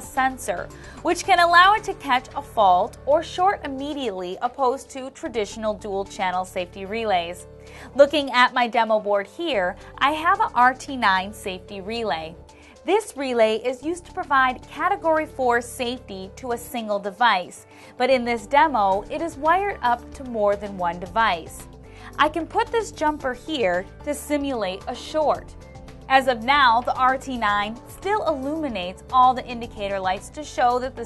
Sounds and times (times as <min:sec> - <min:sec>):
Speech: 0:00.0 - 0:07.4, 0:08.0 - 0:21.6, 0:22.2 - 0:25.4, 0:26.1 - 0:31.0
Music: 0:00.0 - 0:31.0.